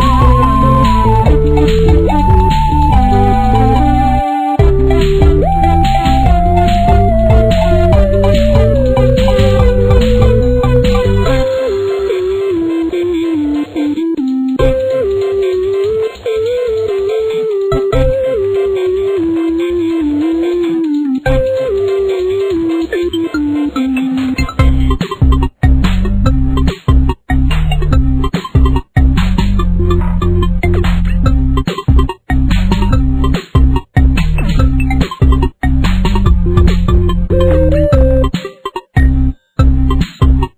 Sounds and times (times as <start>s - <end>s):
Theme music: 0.0s - 25.4s, 35.8s - 40.0s.